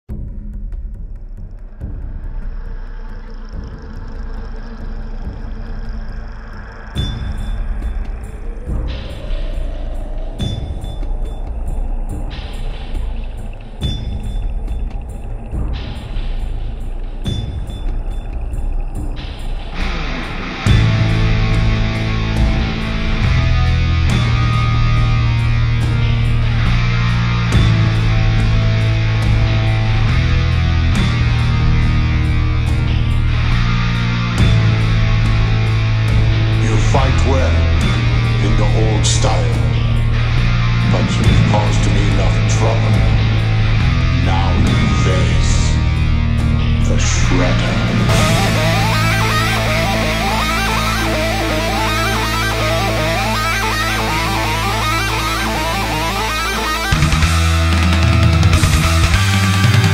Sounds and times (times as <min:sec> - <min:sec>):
Music: 0:00.0 - 0:59.9.